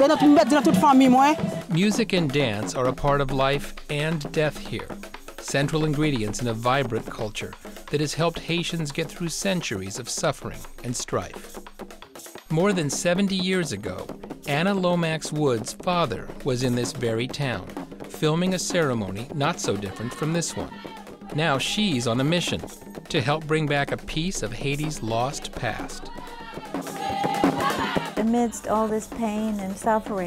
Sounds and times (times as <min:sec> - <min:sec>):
Speech: 0:00.0 - 0:11.4, 0:12.5 - 0:20.8, 0:21.4 - 0:26.1
Music: 0:00.0 - 0:30.2.